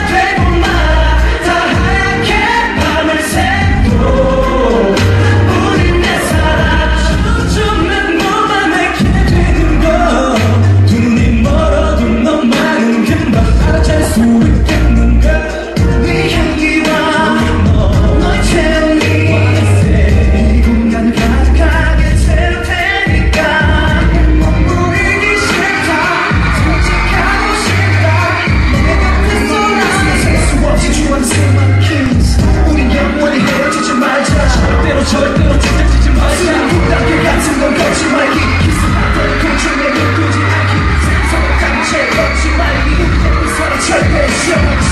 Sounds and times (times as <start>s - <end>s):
Music: 0.0s - 44.9s.